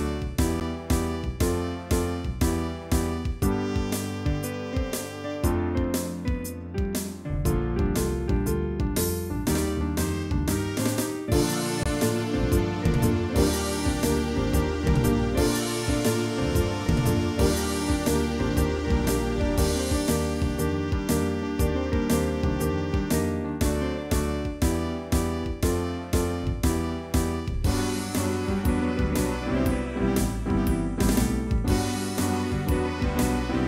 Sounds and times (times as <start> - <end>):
Music: 0.0 - 33.6.